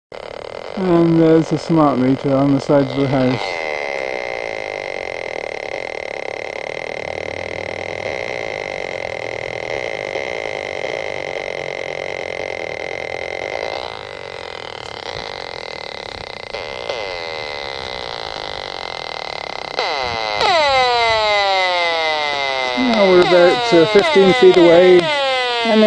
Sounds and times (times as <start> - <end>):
Outside, urban or manmade: 0.1 - 25.8
Speech: 0.8 - 3.4, 22.8 - 25.1.